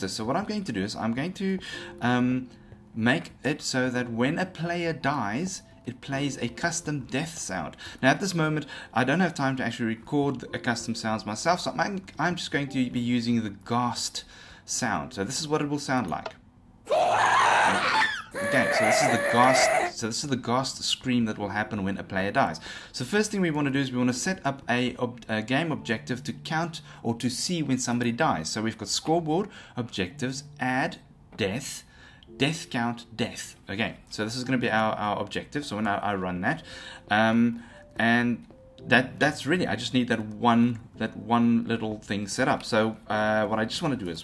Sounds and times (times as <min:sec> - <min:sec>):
Speech: 0:00.0 - 0:16.4, 0:18.4 - 0:44.2.